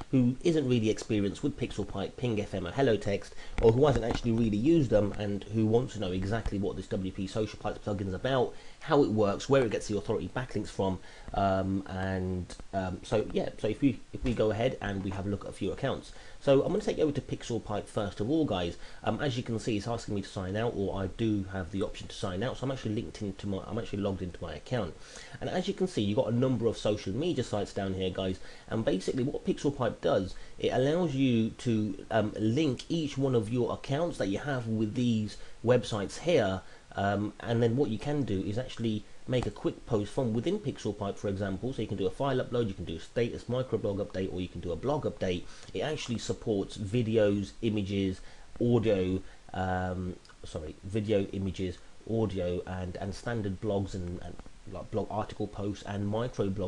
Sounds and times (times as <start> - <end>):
Speech: 0.0 - 56.6.